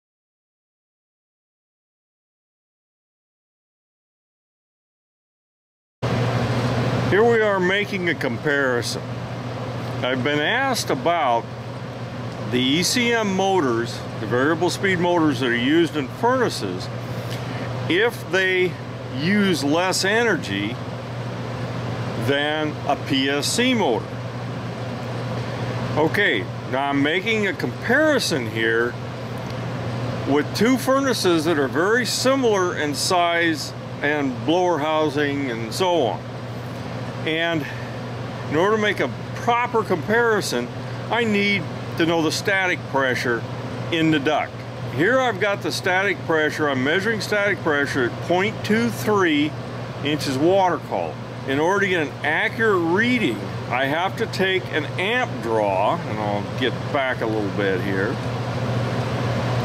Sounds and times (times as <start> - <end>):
Mechanical fan: 6.0 - 59.6.